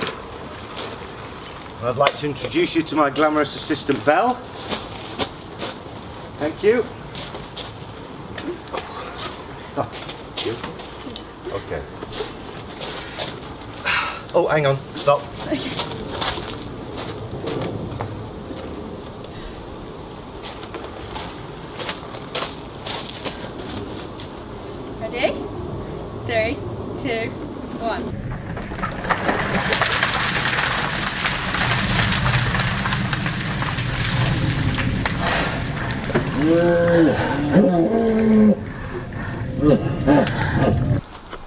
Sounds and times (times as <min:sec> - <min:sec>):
Raindrop: 0:12.2 - 0:18.8, 0:28.2 - 0:40.3.